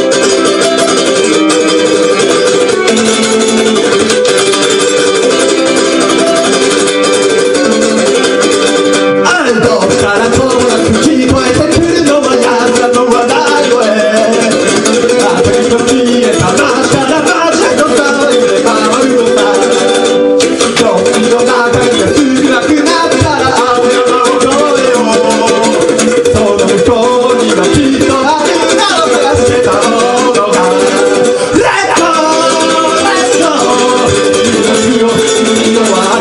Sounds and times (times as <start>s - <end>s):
Ukulele: 0.0s - 36.2s.